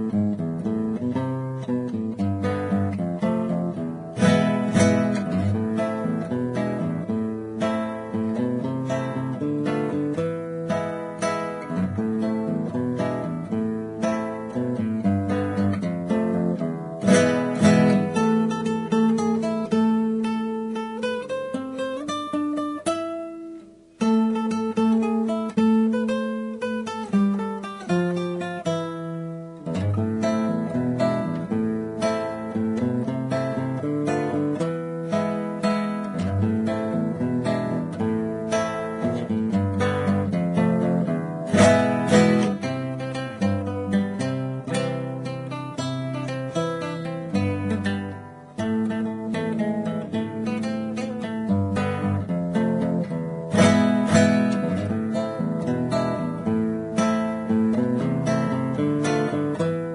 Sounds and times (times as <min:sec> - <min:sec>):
Acoustic guitar: 0:00.0 - 0:59.9.